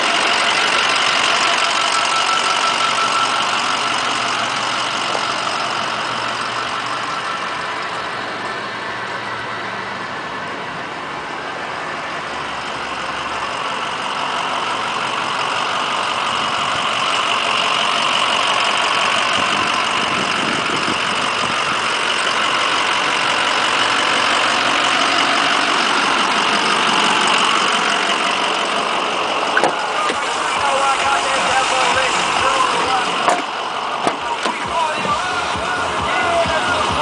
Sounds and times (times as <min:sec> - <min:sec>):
Outside, urban or manmade: 0:00.0 - 0:37.0
Truck: 0:00.0 - 0:37.0.